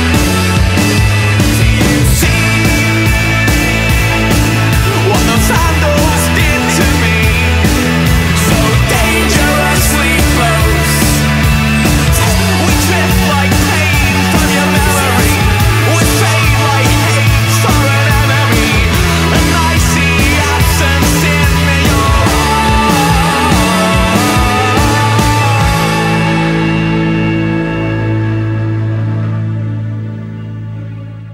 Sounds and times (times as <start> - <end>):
Pop music: 0.0 - 29.5.